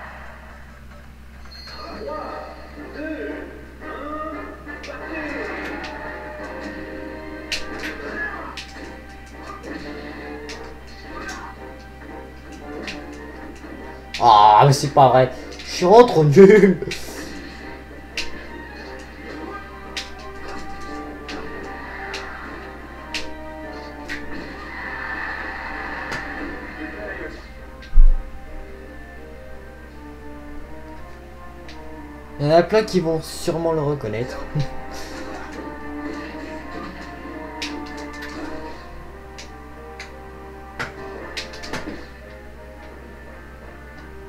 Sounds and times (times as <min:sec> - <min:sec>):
Music: 0:00.0 - 0:44.2.